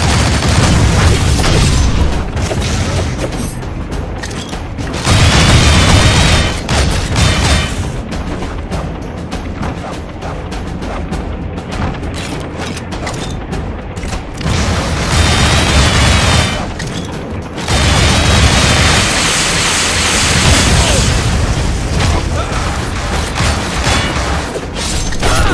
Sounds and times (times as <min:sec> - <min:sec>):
Music: 0:00.0 - 0:25.5.